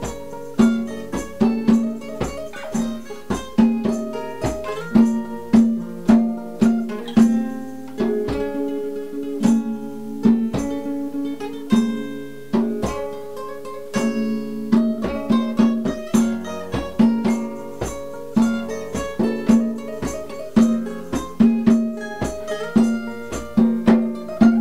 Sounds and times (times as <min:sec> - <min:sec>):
Electric guitar: 0:00.0 - 0:24.6.